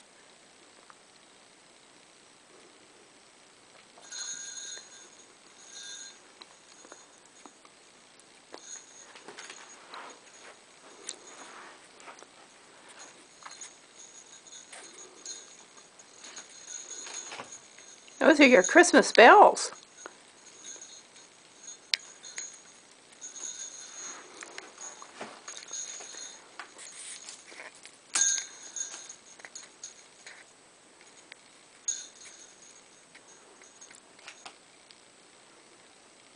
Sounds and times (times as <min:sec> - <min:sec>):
Speech: 0:18.2 - 0:19.8.